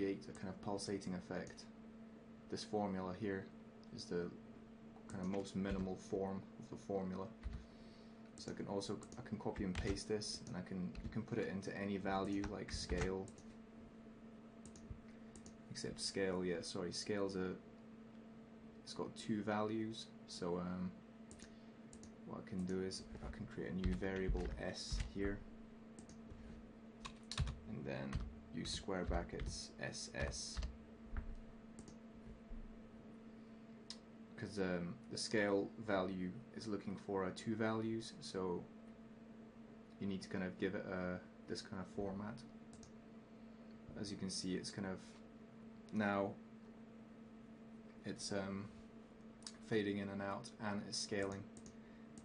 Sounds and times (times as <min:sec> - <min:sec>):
Speech: 0:00.0 - 0:01.8, 0:02.5 - 0:04.4, 0:05.1 - 0:07.4, 0:08.4 - 0:13.4, 0:15.7 - 0:17.7, 0:18.8 - 0:21.0, 0:22.3 - 0:25.4, 0:27.7 - 0:30.7, 0:34.4 - 0:38.7, 0:40.0 - 0:42.5, 0:43.9 - 0:45.2, 0:45.9 - 0:46.4, 0:48.0 - 0:48.8, 0:49.5 - 0:51.6.